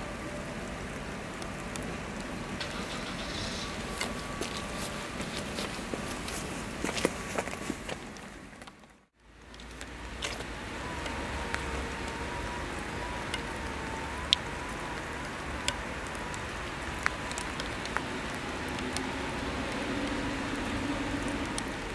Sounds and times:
Rain: 0.0s - 21.9s.

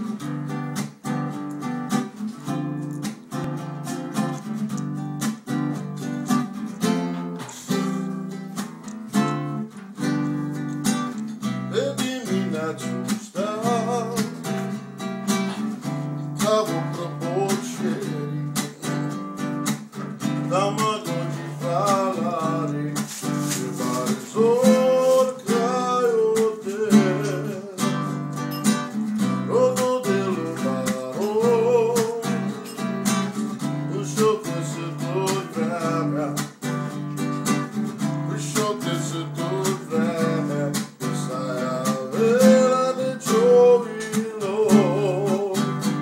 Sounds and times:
Music: 0.0s - 46.0s
Male singing: 7.6s - 8.3s, 11.7s - 14.4s, 16.4s - 19.1s, 20.4s - 28.2s, 29.5s - 32.8s, 33.9s - 36.6s, 38.1s - 46.0s.

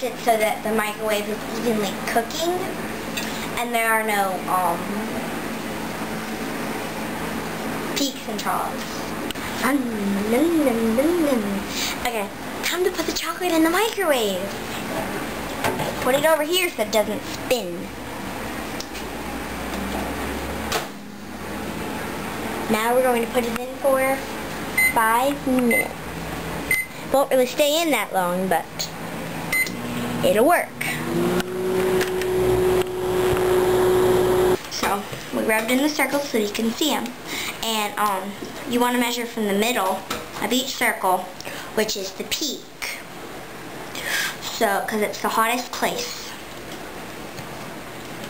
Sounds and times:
Child speech, kid speaking: 0.0s - 2.8s, 3.5s - 5.2s, 8.0s - 14.6s, 15.9s - 17.9s, 22.7s - 24.3s, 24.9s - 26.0s, 27.1s - 28.9s, 30.2s - 31.0s, 34.7s - 43.0s, 44.4s - 46.4s
Microwave oven: 16.8s - 27.2s, 28.8s - 34.7s
Beep, bleep: 26.7s - 26.9s.

